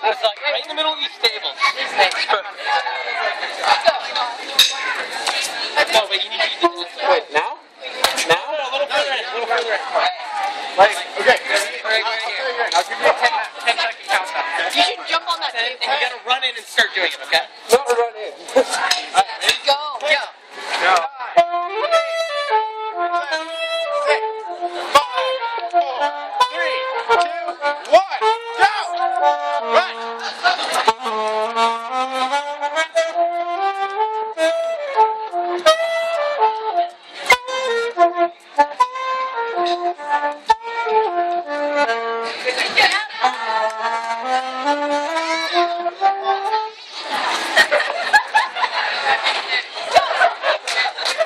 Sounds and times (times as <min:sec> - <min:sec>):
Music: 0:21.3 - 0:47.7.